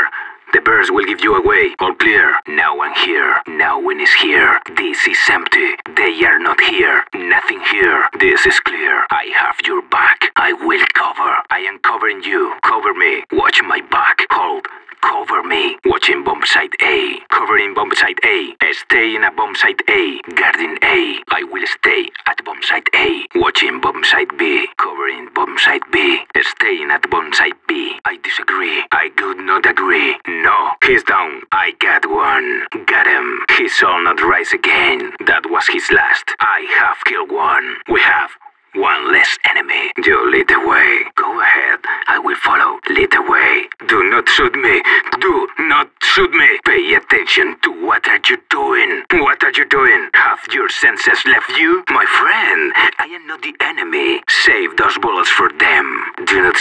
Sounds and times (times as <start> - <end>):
Speech: 0.0 - 56.6.